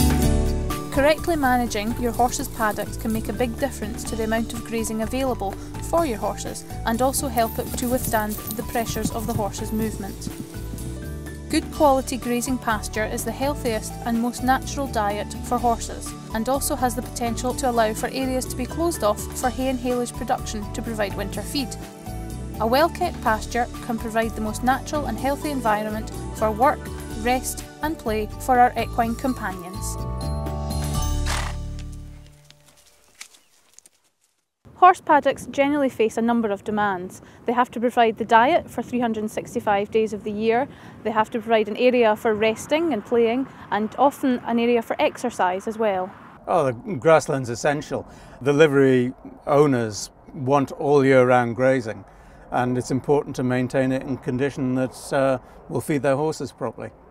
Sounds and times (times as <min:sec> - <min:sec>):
Music: 0:00.0 - 0:32.6
Speech: 0:01.0 - 0:10.3, 0:11.5 - 0:21.8, 0:22.6 - 0:30.0, 0:34.8 - 0:52.0, 0:52.6 - 0:56.9.